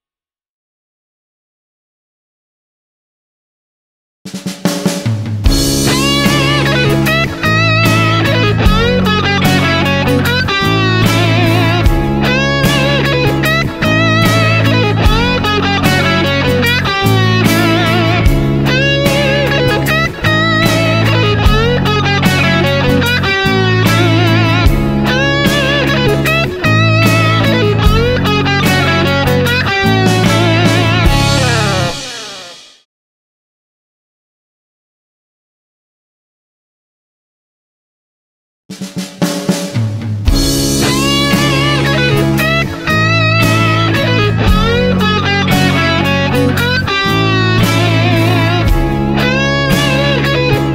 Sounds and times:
Strum: 5.0s - 32.7s, 39.7s - 50.7s
Acoustic guitar: 5.5s - 32.6s, 40.3s - 50.7s
Electric guitar: 5.5s - 32.8s, 40.3s - 50.7s.

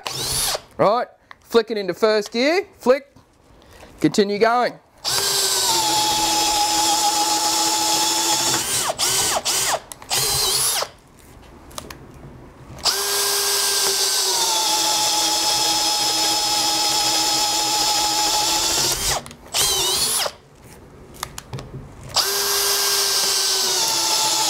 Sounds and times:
Drill: 0.0s - 0.7s, 5.0s - 11.0s, 12.8s - 20.4s, 22.2s - 24.5s.

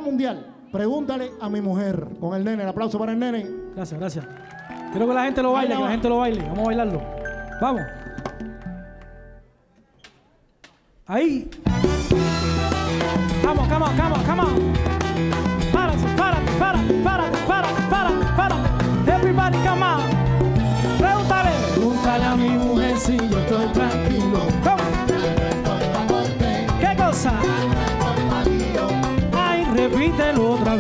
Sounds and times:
Salsa music: 0.0s - 9.4s, 11.6s - 30.8s
Maraca: 11.6s - 30.8s
Singing: 20.8s - 30.8s.

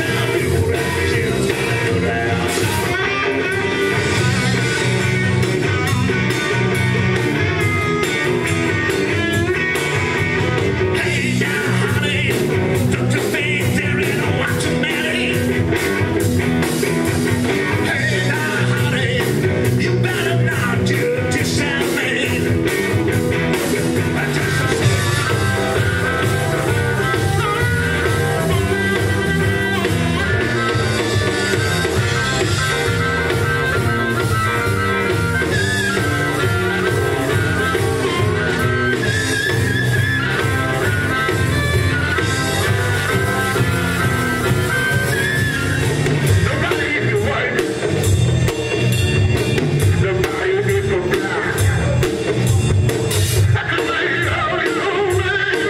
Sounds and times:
Blues: 0.0s - 55.6s.

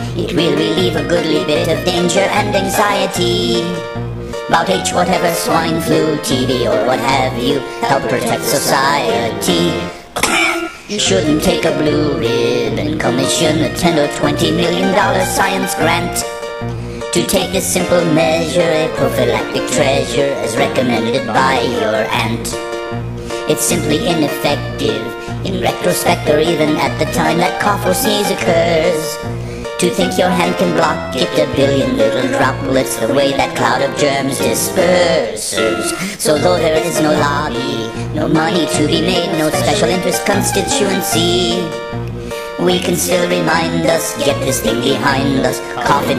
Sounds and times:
Music: 0.0s - 46.1s.

